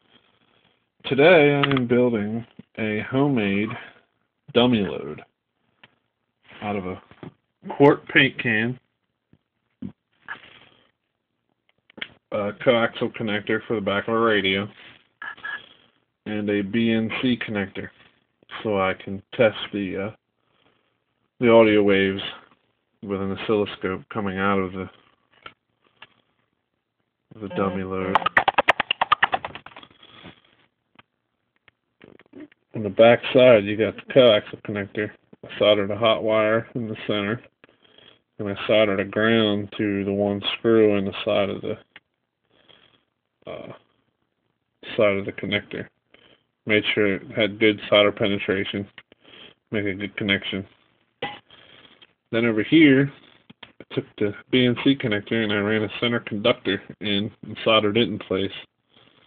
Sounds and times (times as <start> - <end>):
Speech: 1.0 - 5.3, 6.6 - 8.8, 12.3 - 14.8, 16.2 - 17.9, 18.5 - 20.2, 21.4 - 24.9, 27.4 - 28.2, 32.4 - 37.5, 38.4 - 41.8, 43.5 - 43.8, 44.8 - 45.9, 46.7 - 49.0, 49.7 - 50.7, 52.3 - 53.2, 53.8 - 58.7.